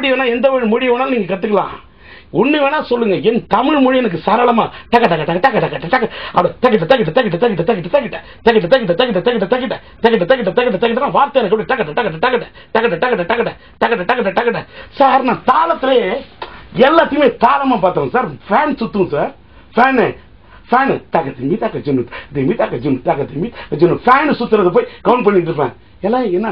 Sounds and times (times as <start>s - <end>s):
Speech: 0.0s - 26.5s.